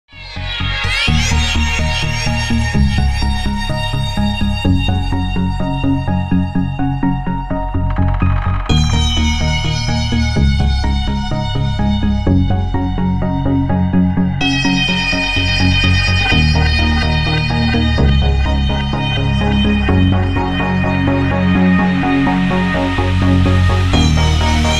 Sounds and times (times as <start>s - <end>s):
Electronica: 0.1s - 24.7s
Soundtrack music: 0.1s - 24.7s
Techno: 0.1s - 24.7s.